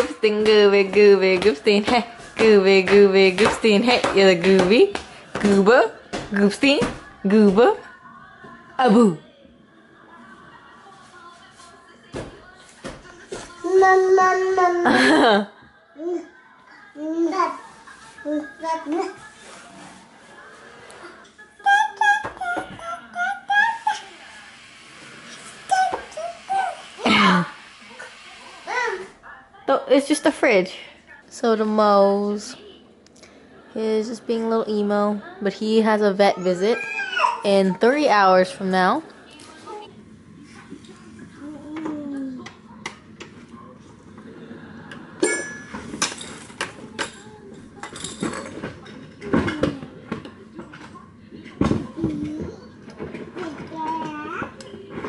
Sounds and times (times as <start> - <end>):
Inside, small room: 0.0 - 55.0
Child speech, kid speaking: 13.3 - 14.9, 16.0 - 19.4, 21.6 - 24.3, 25.5 - 27.1, 28.6 - 29.2, 36.2 - 37.9, 39.4 - 39.9, 41.4 - 42.9, 51.7 - 54.8.